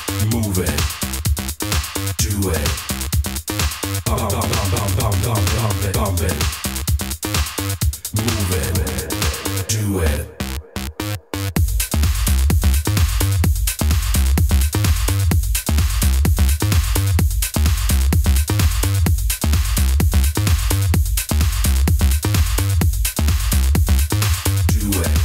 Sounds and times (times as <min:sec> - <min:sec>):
House music: 0:00.0 - 0:25.2.